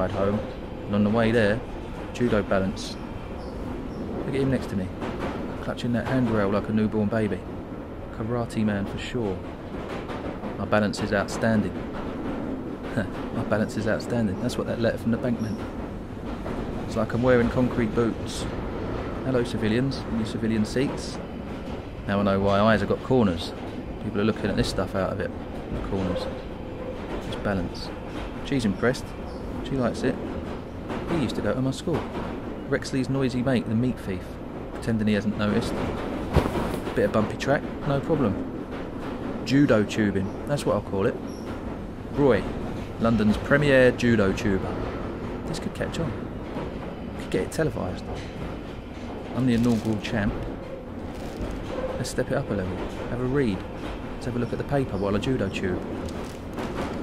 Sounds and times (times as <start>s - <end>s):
Speech: 0.0s - 3.0s, 4.3s - 5.0s, 5.6s - 7.5s, 8.1s - 9.5s, 10.6s - 11.8s, 12.9s - 15.7s, 16.9s - 18.6s, 19.2s - 21.2s, 22.1s - 26.4s, 27.2s - 30.2s, 31.0s - 32.1s, 32.7s - 35.9s, 36.9s - 38.4s, 39.4s - 41.2s, 42.1s - 46.2s, 47.2s - 48.2s, 49.4s - 50.5s, 52.0s - 55.9s.